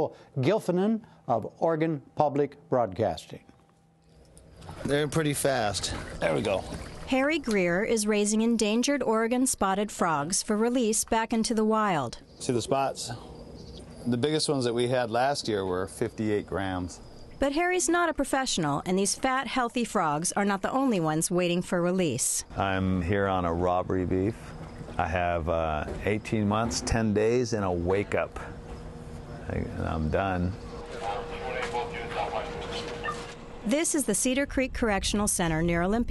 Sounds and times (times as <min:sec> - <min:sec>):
Speech: 0:25.0 - 0:28.5, 0:29.5 - 0:32.8, 0:33.7 - 0:36.1.